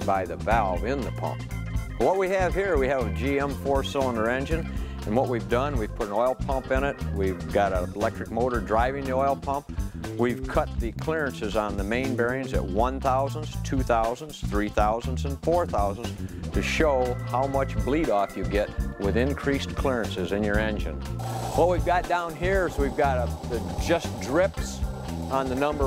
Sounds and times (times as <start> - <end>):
Speech: 0.0 - 1.4, 2.0 - 9.6, 10.2 - 21.0, 21.6 - 25.8
Music: 0.0 - 25.8.